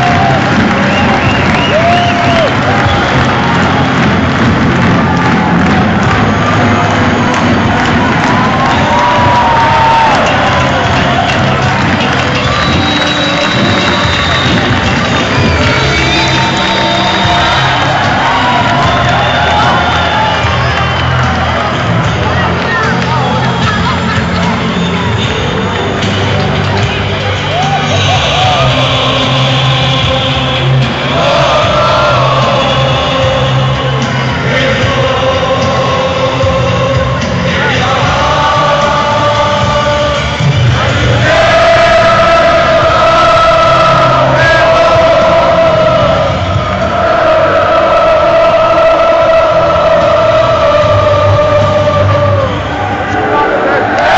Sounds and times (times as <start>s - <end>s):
Music: 0.0s - 54.1s
Speech: 22.2s - 24.8s.